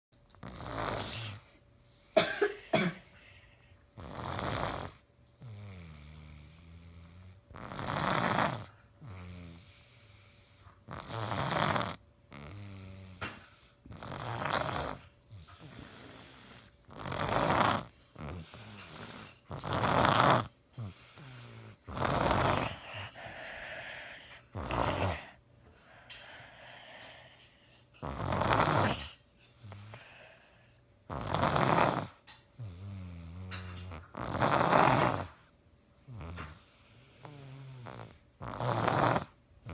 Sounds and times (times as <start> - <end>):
Snoring: 0.4 - 1.6, 4.0 - 39.7
Cough: 2.2 - 3.5.